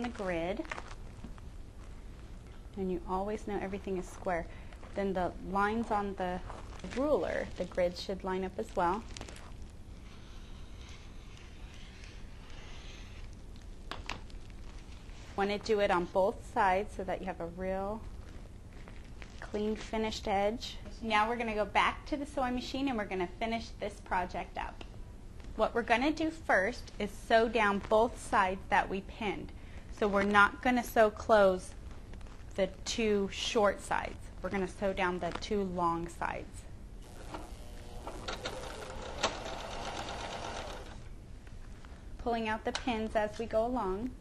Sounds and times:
Speech: 0.0 - 0.7, 2.8 - 9.1, 15.4 - 18.0, 19.4 - 24.8, 25.6 - 31.8, 32.6 - 36.7, 42.2 - 44.2.

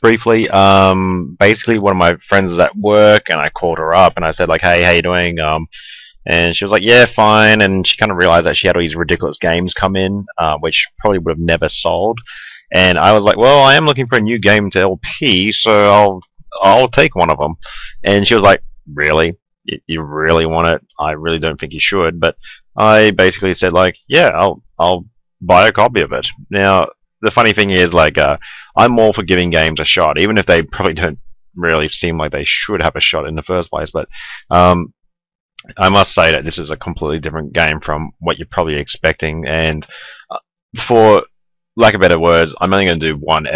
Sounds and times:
Speech: 0.0 - 34.9, 35.6 - 43.5.

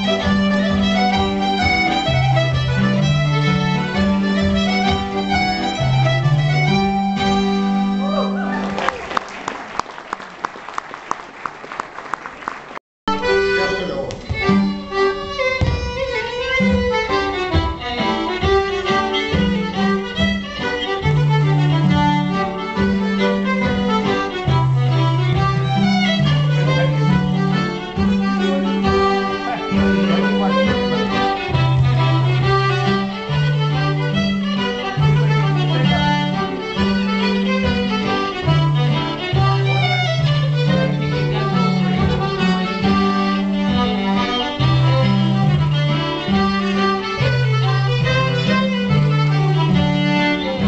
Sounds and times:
Violin, fiddle: 0.0 - 8.6, 13.1 - 50.6
Speech: 13.6 - 14.3, 28.5 - 31.1, 35.6 - 36.2.

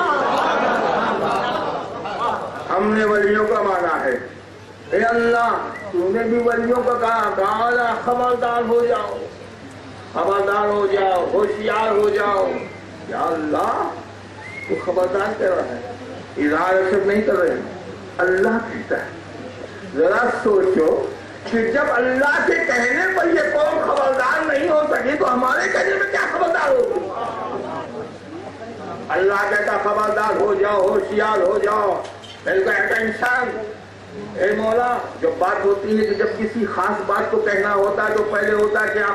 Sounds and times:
Male speech, man speaking: 2.7 - 4.3, 4.9 - 9.4, 10.2 - 14.0, 14.7 - 19.2, 19.9 - 27.2, 29.1 - 39.1.

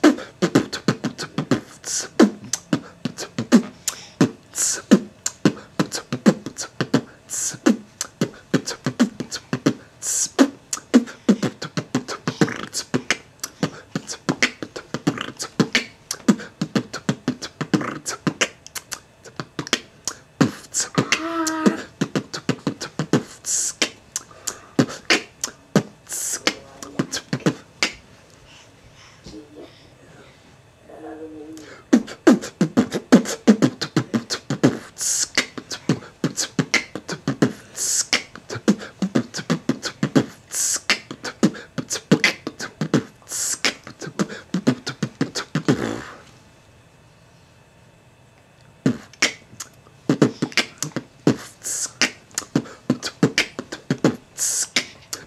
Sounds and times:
Beatboxing: 0.0 - 28.1, 31.6 - 46.3, 48.8 - 55.2.

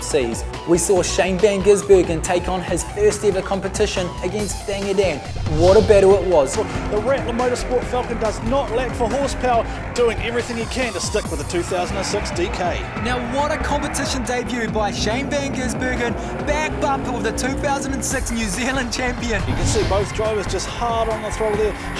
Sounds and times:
Music: 0.0 - 21.9
Speech: 0.0 - 21.9.

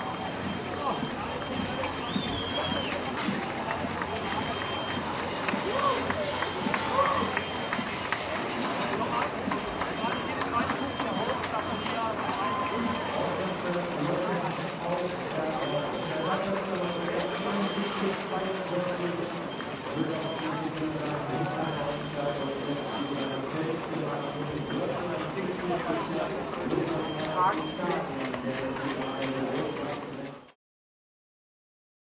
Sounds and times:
Outside, urban or manmade: 0.0 - 30.6
Run: 0.0 - 30.6
Speech: 0.0 - 30.6.

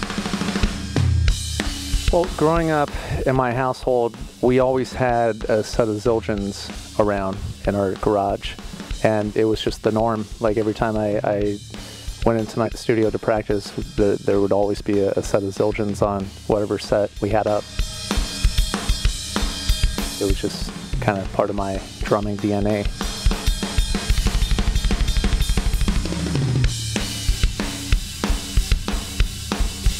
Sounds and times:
Music: 0.0 - 29.9
Speech: 2.1 - 11.6, 12.2 - 17.6, 20.2 - 22.9.

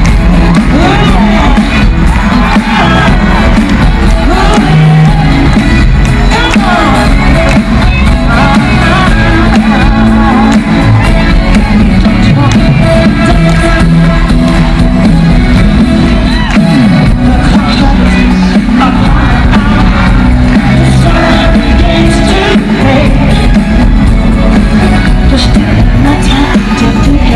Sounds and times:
Pop music: 0.0 - 27.3
Singing: 0.0 - 27.3.

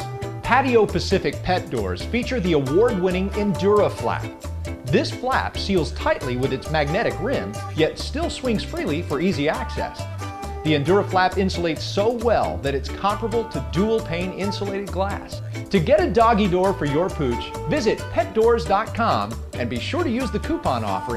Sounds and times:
Music: 0.0 - 21.1
Speech: 0.4 - 4.3, 4.9 - 10.0, 10.7 - 21.1.

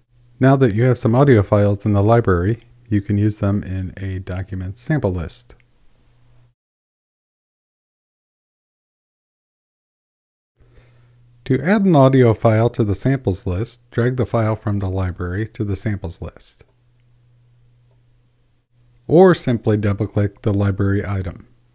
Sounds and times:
Speech: 0.4 - 5.6, 11.4 - 16.7, 19.1 - 21.6.

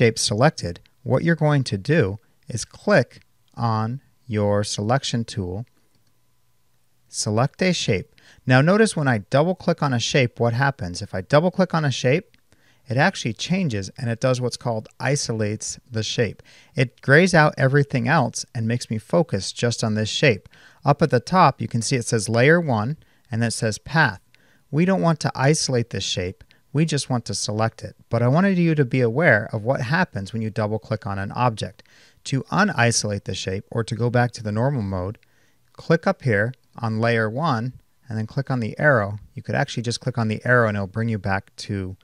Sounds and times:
Speech: 0.0 - 5.7, 7.1 - 35.2, 35.8 - 42.0.

